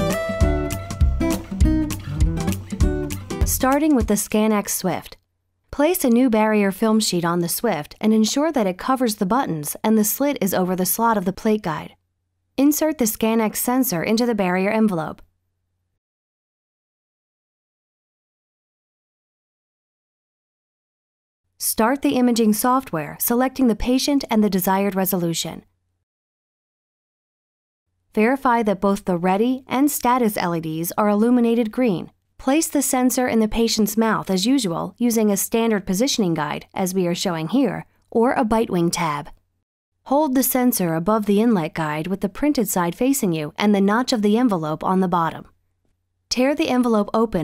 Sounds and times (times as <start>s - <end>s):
Speech: 3.4s - 12.0s, 12.6s - 15.3s, 21.6s - 25.7s, 28.2s - 39.4s, 40.1s - 45.6s, 46.3s - 47.4s.